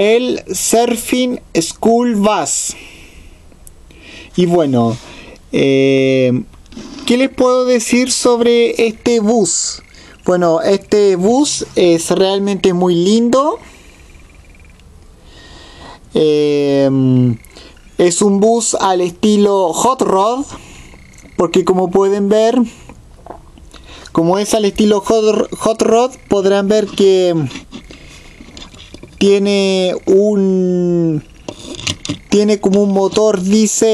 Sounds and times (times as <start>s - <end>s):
Speech: 0.0s - 2.8s, 4.4s - 13.6s, 16.2s - 17.4s, 18.0s - 20.6s, 21.4s - 22.8s, 24.2s - 27.6s, 29.2s - 31.3s, 32.3s - 33.9s.